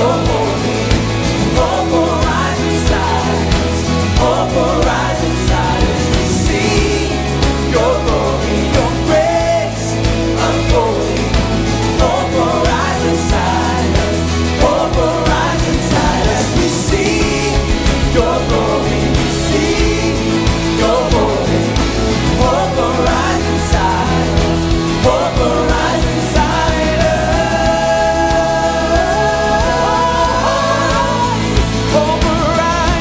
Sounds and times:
Exciting music: 0.0s - 33.0s.

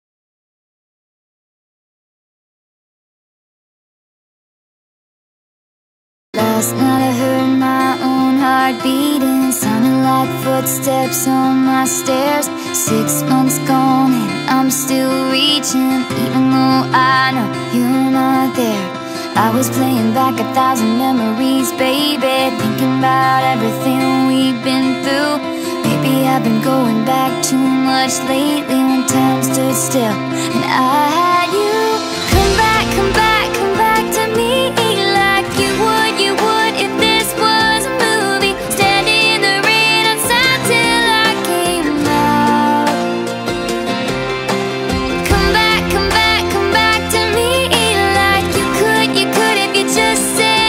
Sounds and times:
Music: 6.4s - 50.6s.

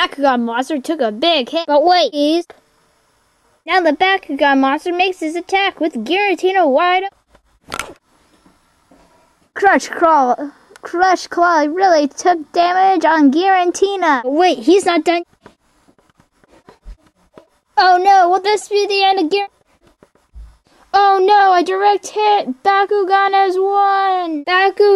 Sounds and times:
Speech: 0.0s - 2.5s, 3.7s - 7.1s, 9.6s - 15.2s, 17.8s - 19.5s, 21.0s - 24.9s
Inside, small room: 0.0s - 24.9s.

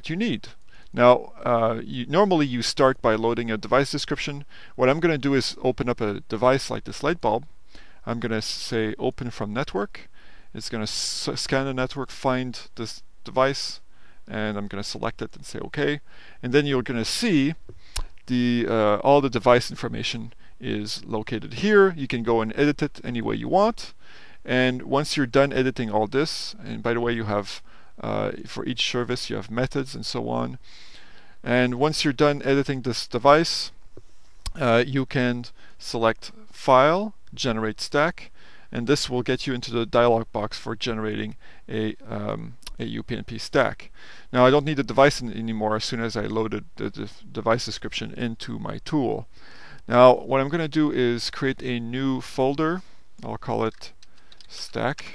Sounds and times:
Speech: 0.0s - 17.6s, 18.3s - 30.6s, 31.4s - 33.8s, 34.5s - 49.3s, 49.9s - 55.1s.

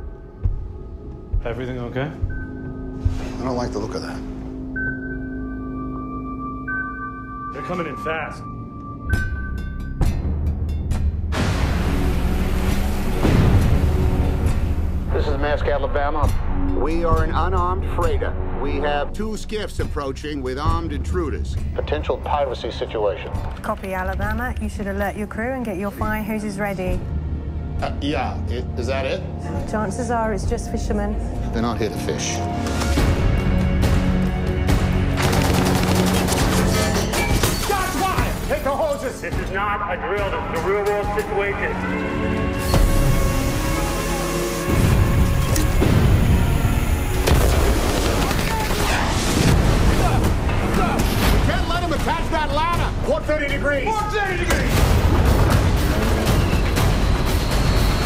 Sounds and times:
Music: 0.0s - 58.0s.

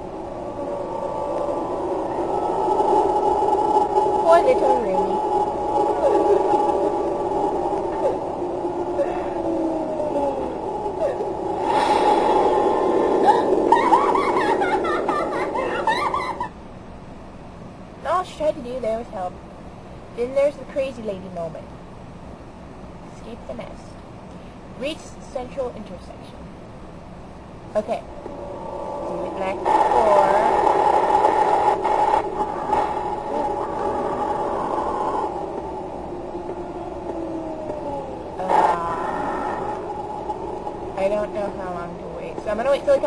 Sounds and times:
Speech: 4.2s - 5.2s, 18.0s - 19.4s, 20.2s - 21.7s, 23.1s - 24.0s, 24.8s - 26.4s, 27.8s - 28.1s, 29.2s - 30.6s, 38.4s - 39.2s, 41.0s - 43.0s.

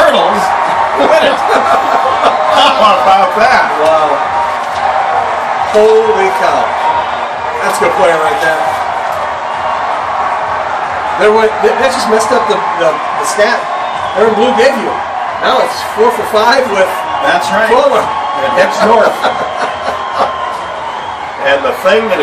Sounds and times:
Speech: 2.6s - 4.2s, 5.7s - 6.7s, 7.6s - 8.7s, 11.2s - 13.6s, 14.2s - 19.3s, 21.4s - 22.2s.

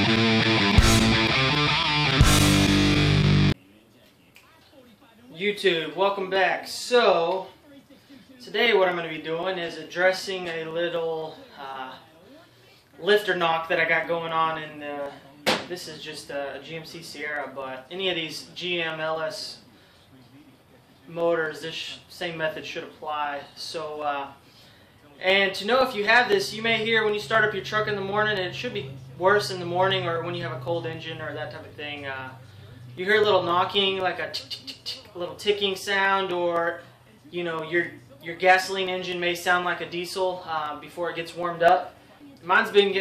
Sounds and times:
Speech: 3.6s - 24.4s, 25.0s - 43.0s.

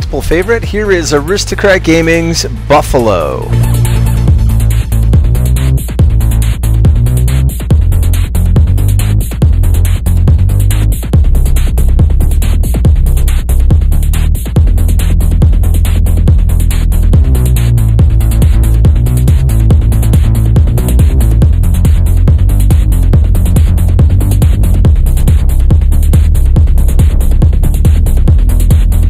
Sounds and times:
Music: 0.0s - 29.1s.

